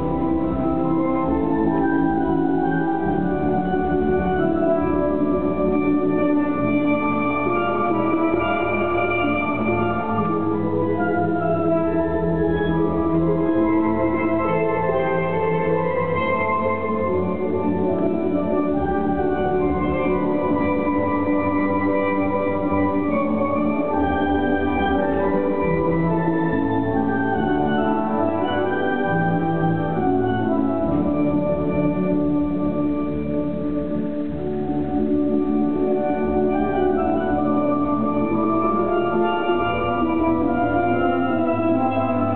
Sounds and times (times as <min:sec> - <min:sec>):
Music: 0:00.0 - 0:42.3.